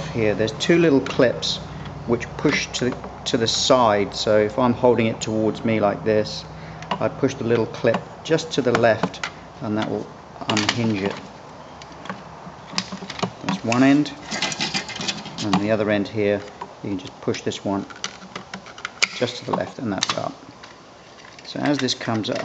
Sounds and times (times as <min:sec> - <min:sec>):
Speech: 0:00.0 - 0:11.2, 0:13.5 - 0:14.2, 0:15.4 - 0:17.9, 0:19.2 - 0:20.4, 0:21.5 - 0:22.4.